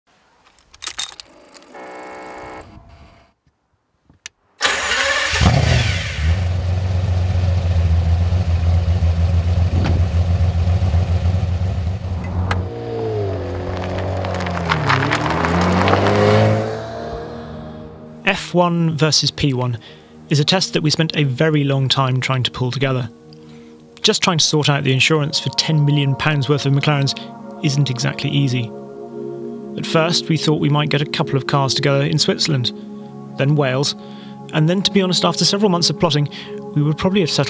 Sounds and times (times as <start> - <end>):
Car: 0.9 - 3.0, 4.6 - 18.2.